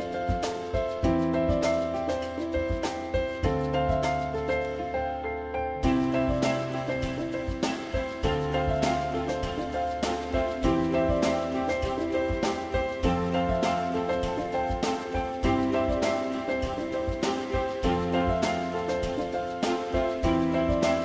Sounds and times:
Music: 0.0s - 21.0s.

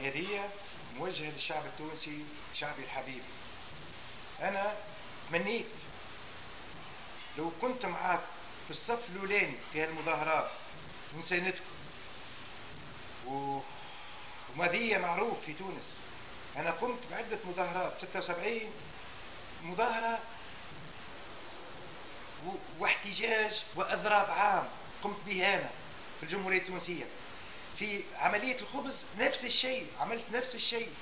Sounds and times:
Speech: 0.0s - 3.3s, 4.4s - 5.9s, 7.4s - 11.7s, 13.2s - 13.8s, 14.5s - 16.0s, 16.6s - 18.8s, 19.6s - 20.4s, 22.4s - 27.2s, 27.8s - 31.0s.

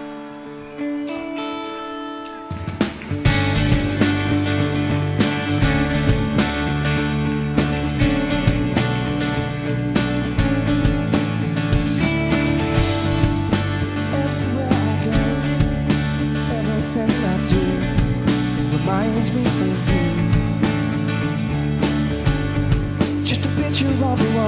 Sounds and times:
Music: 0.0s - 24.4s.

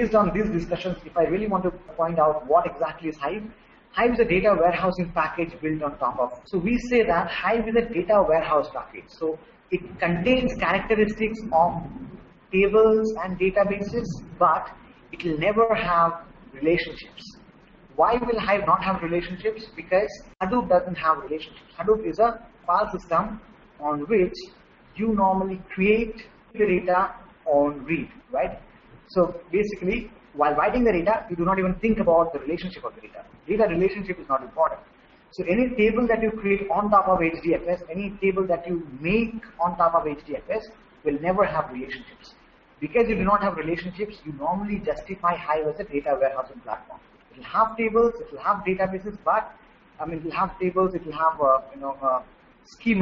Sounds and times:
Speech: 0.0s - 17.4s, 18.0s - 53.0s.

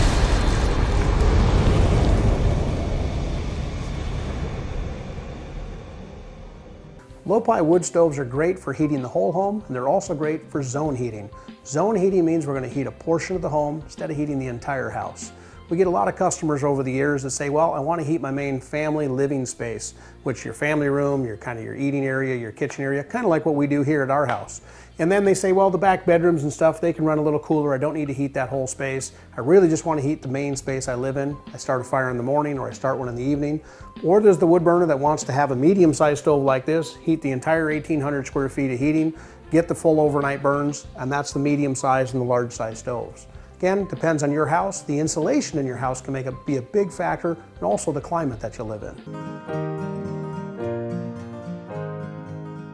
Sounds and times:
Music: 6.9s - 52.7s
Speech: 7.3s - 49.0s.

